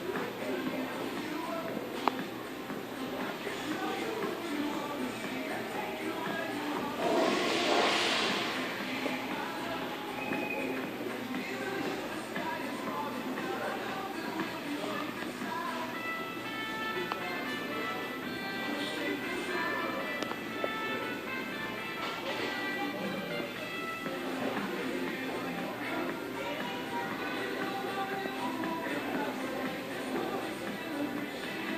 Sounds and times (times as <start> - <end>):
Music: 0.0 - 31.7.